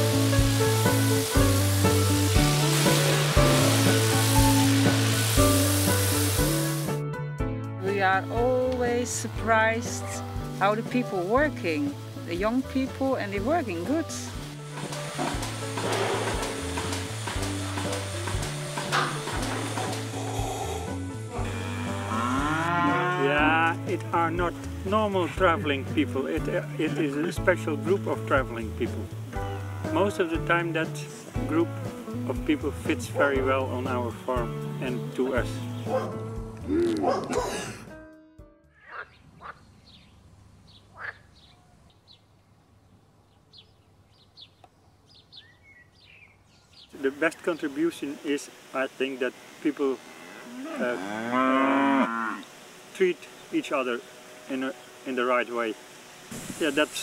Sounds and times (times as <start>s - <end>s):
Music: 0.0s - 39.3s, 52.7s - 57.0s
Speech: 23.2s - 29.1s, 30.0s - 31.7s, 32.3s - 35.6s, 47.0s - 50.0s, 53.0s - 55.8s, 56.6s - 57.0s
Bow-wow: 35.9s - 36.2s, 37.0s - 37.6s.